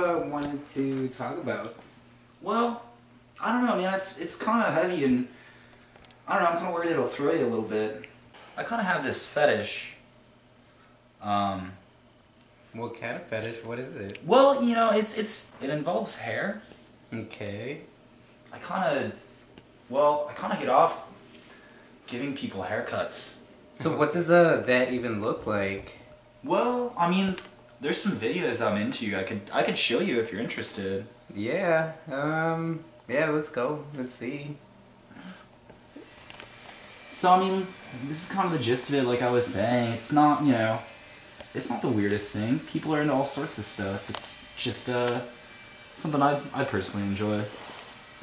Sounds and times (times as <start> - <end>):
Speech: 0.0 - 1.8, 2.4 - 5.3, 6.3 - 10.0, 11.2 - 11.8, 12.7 - 17.9, 18.5 - 19.2, 19.9 - 21.1, 22.1 - 34.6, 37.2 - 40.9, 41.6 - 45.3, 46.0 - 47.6
Inside, small room: 0.0 - 48.2.